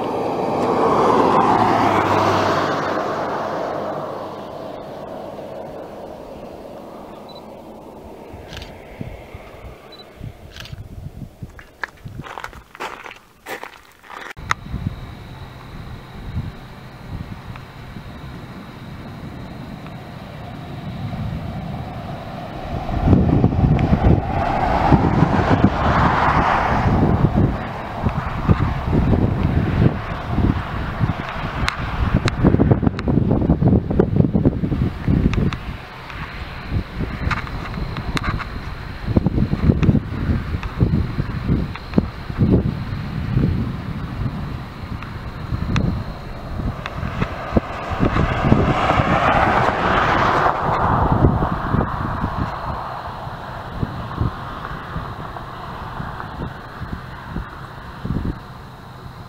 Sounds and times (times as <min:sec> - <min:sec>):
Rustle: 0:02.0 - 0:59.2.